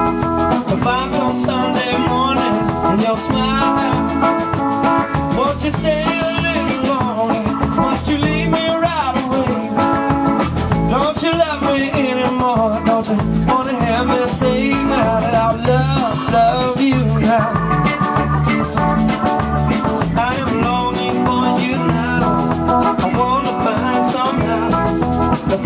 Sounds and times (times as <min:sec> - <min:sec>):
Music: 0:00.0 - 0:25.6.